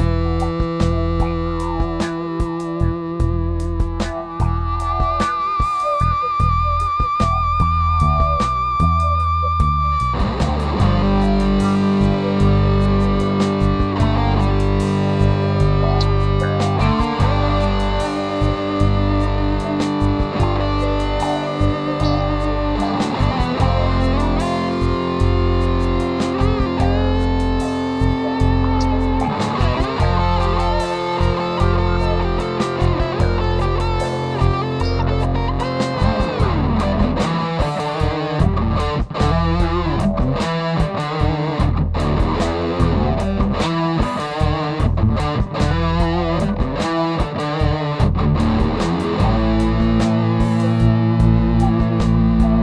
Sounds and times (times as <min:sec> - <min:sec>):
Distortion: 0:00.0 - 0:52.6
Effects unit: 0:00.0 - 0:52.6
Guitar: 0:00.0 - 0:52.6.